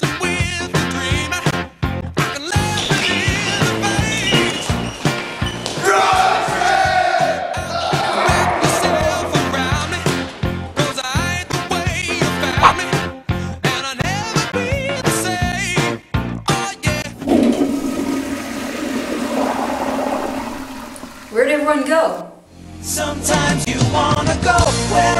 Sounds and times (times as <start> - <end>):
Music: 0.0 - 17.3, 22.5 - 25.1
Toilet flush: 17.0 - 21.9
Speech: 21.3 - 22.3.